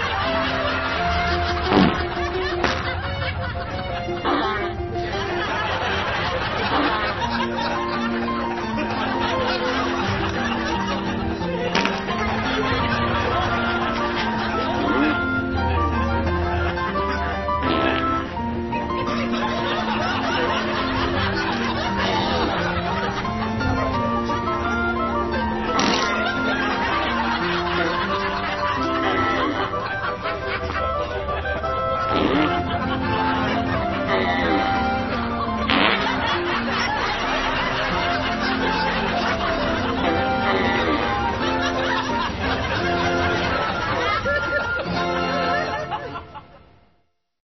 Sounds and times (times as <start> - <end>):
Laughter: 0.0 - 46.7
Fart: 1.7 - 2.9, 4.2 - 4.7, 14.8 - 15.3, 17.6 - 18.3, 21.9 - 22.6, 25.7 - 26.5, 29.0 - 29.7, 32.1 - 32.7, 34.0 - 34.8, 35.6 - 36.2, 40.0 - 41.1.